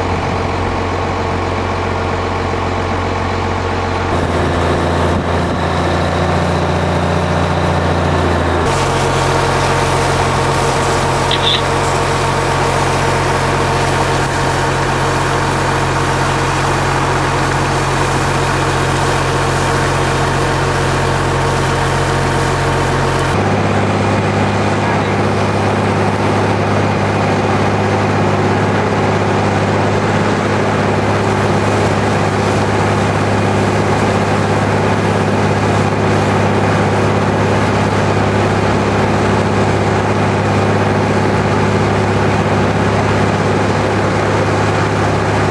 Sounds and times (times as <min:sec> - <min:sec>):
Pump (liquid): 0:00.0 - 0:45.5.